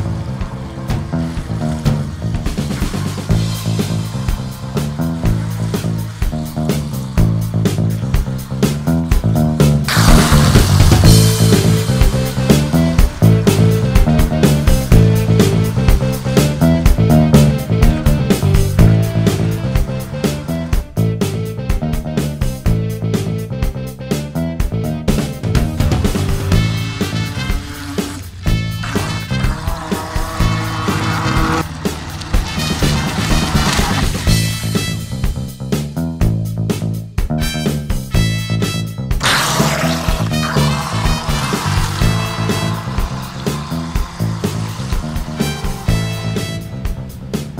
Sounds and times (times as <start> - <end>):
Music: 0.0 - 47.6.